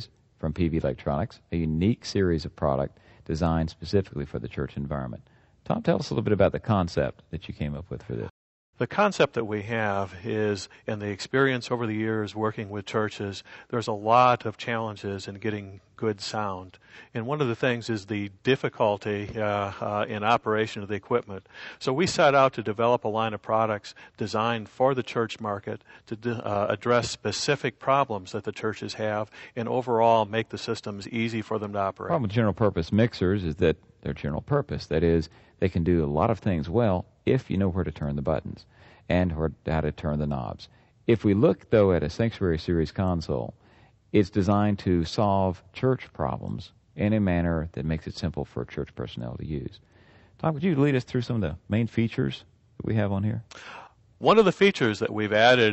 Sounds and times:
Speech: 0:00.0 - 0:49.8, 0:50.4 - 0:53.5, 0:54.2 - 0:55.7.

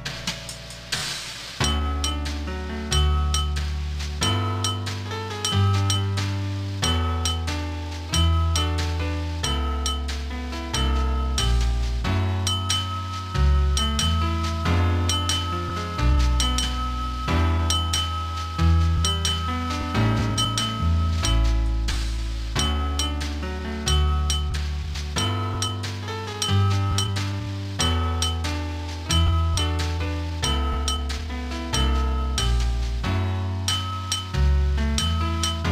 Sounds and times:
Music: 0:00.0 - 0:35.7
Chink, clink: 0:03.2 - 0:03.6, 0:04.6 - 0:06.1, 0:12.5 - 0:13.2, 0:25.6 - 0:27.2, 0:28.2 - 0:28.5, 0:33.7 - 0:34.4.

